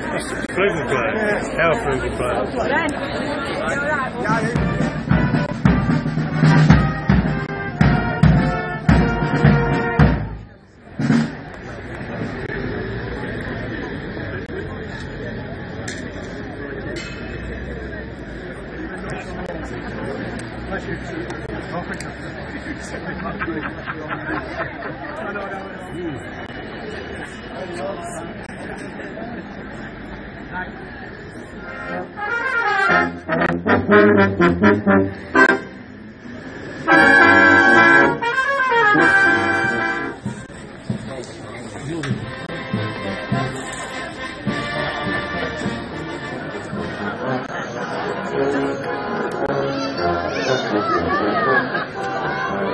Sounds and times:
Speech: 0.0s - 8.2s, 10.0s - 33.0s, 38.9s - 52.7s
Music: 3.6s - 11.6s, 31.6s - 35.8s, 36.6s - 52.7s.

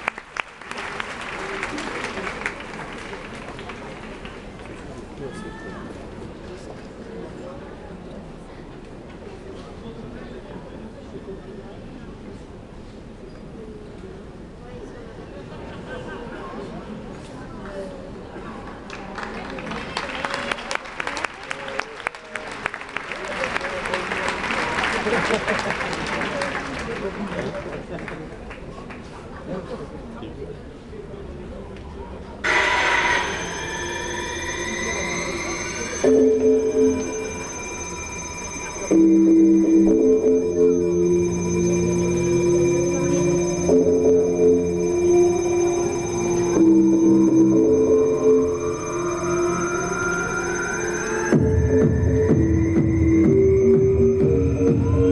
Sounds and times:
Techno: 32.5s - 55.1s.

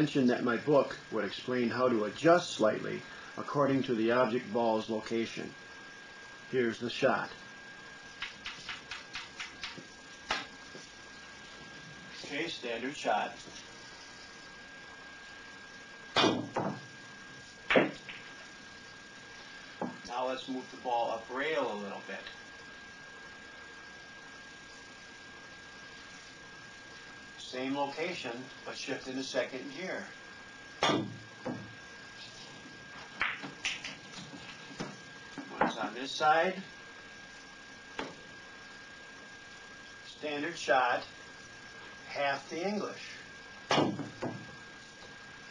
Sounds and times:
Speech: 0.0s - 5.6s, 6.5s - 7.4s, 12.2s - 13.5s, 20.1s - 22.4s, 27.4s - 30.2s, 35.6s - 36.7s, 40.1s - 41.2s, 42.1s - 43.2s.

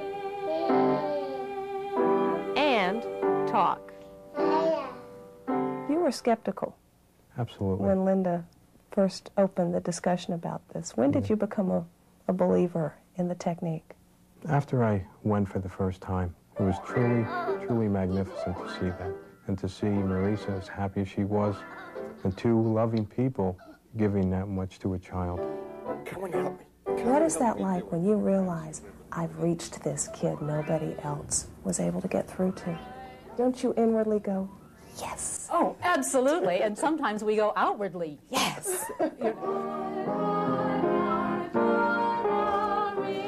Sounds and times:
Music: 0.0s - 6.1s, 16.6s - 22.9s, 25.1s - 28.9s, 39.3s - 43.2s
Speech: 10.8s - 13.6s, 14.5s - 21.6s.

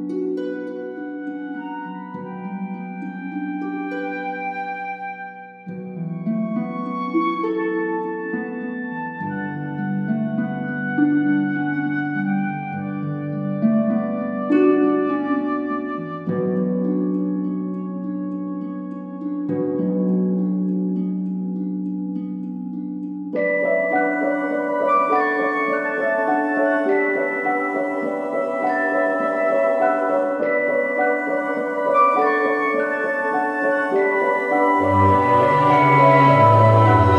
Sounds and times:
Music: 0.0s - 37.1s.

